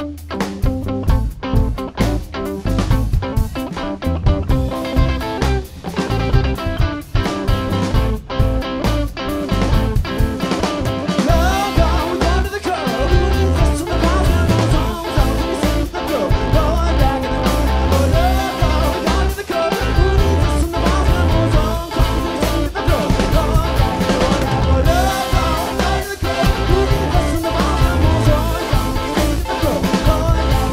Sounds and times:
Music: 0:00.0 - 0:30.7
Singing: 0:11.2 - 0:30.7.

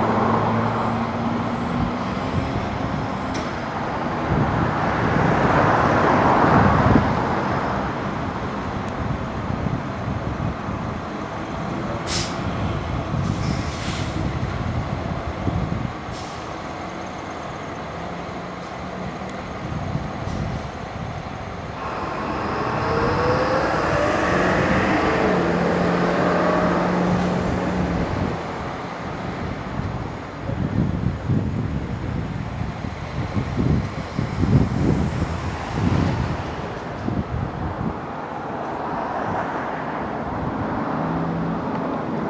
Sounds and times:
Car: 0:00.0 - 0:42.3.

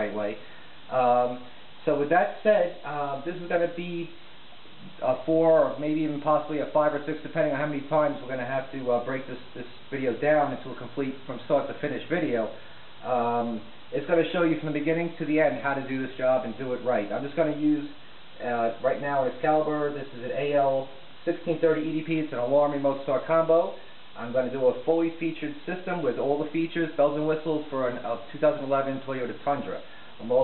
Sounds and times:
Speech: 0:00.0 - 0:04.2, 0:04.8 - 0:30.4.

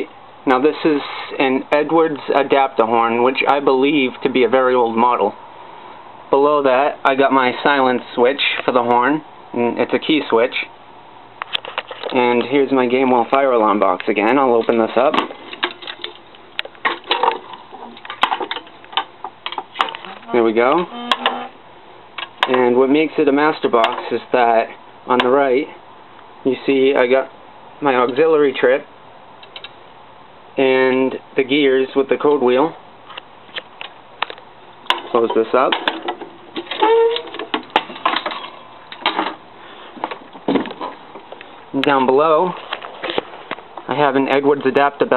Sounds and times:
Speech: 0:00.0 - 0:05.4, 0:06.3 - 0:10.8, 0:12.1 - 0:15.3, 0:20.1 - 0:20.9, 0:22.4 - 0:25.8, 0:26.5 - 0:28.9, 0:30.6 - 0:32.8, 0:35.1 - 0:35.9, 0:41.7 - 0:42.6, 0:43.9 - 0:45.1.

